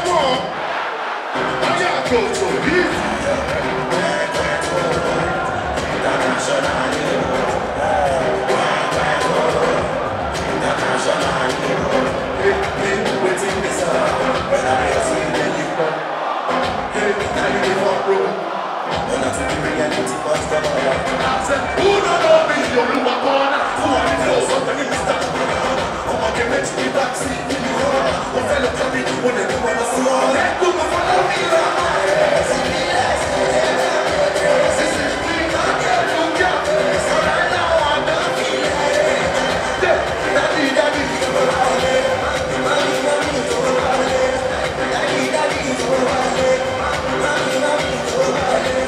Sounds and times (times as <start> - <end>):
Music: 0.0 - 0.6, 1.2 - 48.8.